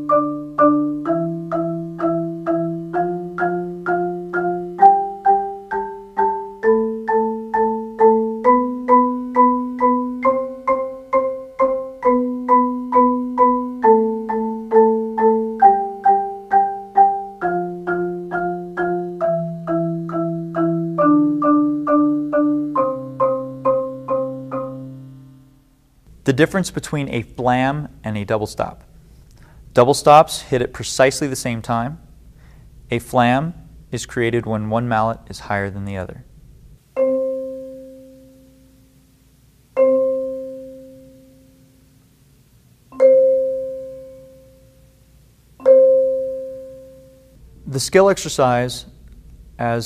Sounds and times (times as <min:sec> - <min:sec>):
Vibraphone: 0:00.0 - 0:25.4, 0:37.0 - 0:38.8, 0:39.8 - 0:41.7, 0:43.0 - 0:44.8, 0:45.6 - 0:47.4
Speech: 0:26.3 - 0:28.8, 0:29.8 - 0:32.0, 0:32.9 - 0:36.3, 0:47.7 - 0:49.0, 0:49.6 - 0:49.8.